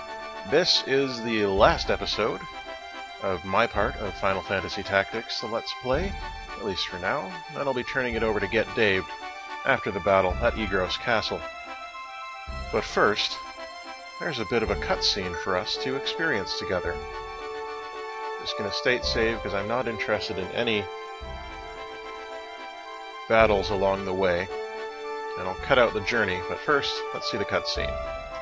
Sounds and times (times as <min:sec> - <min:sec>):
Music: 0:00.0 - 0:28.4
Speech: 0:00.5 - 0:02.5, 0:03.2 - 0:09.0, 0:09.7 - 0:11.4, 0:12.8 - 0:13.4, 0:14.2 - 0:17.0, 0:18.4 - 0:20.9, 0:23.3 - 0:24.5, 0:25.4 - 0:28.0.